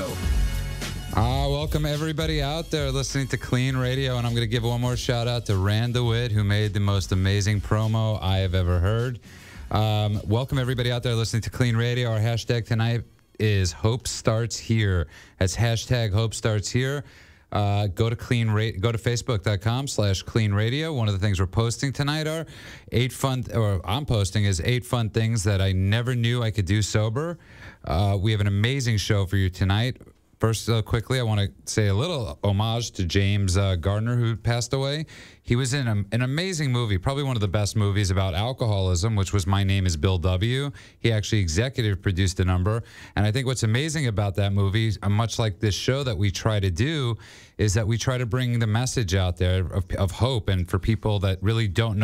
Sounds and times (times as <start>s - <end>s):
Speech: 0.0s - 0.2s, 1.2s - 52.0s.